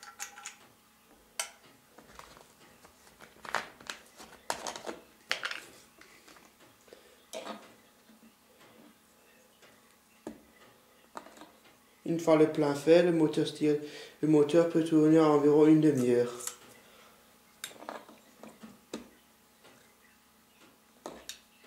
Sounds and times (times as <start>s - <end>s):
Speech: 12.1s - 16.6s.